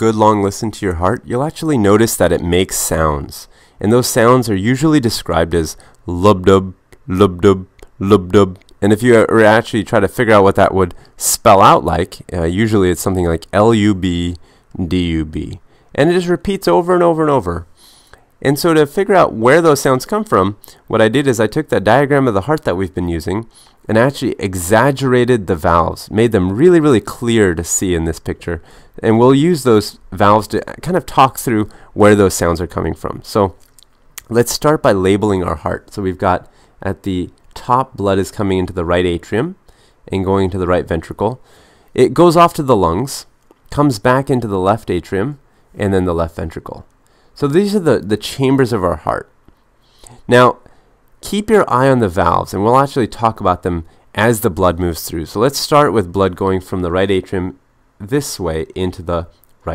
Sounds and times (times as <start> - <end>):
Speech: 0.0 - 17.7, 18.4 - 49.4, 50.1 - 59.7.